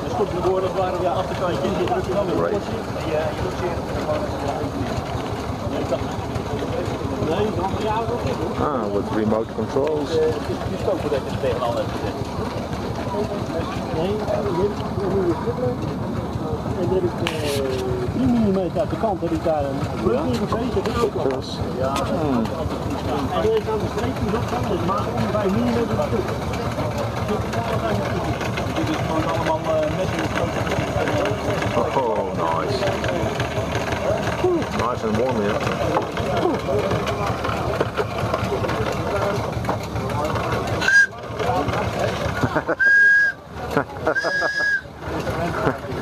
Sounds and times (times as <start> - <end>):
Speech: 0.0 - 42.5.